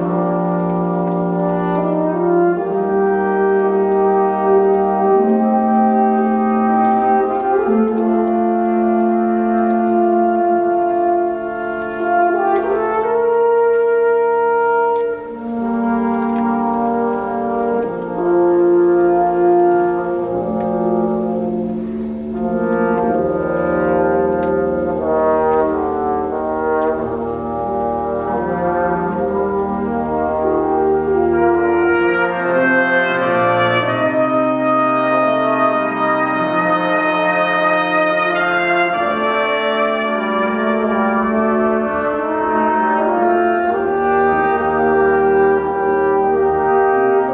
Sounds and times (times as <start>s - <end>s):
Brass instrument: 0.0s - 47.3s.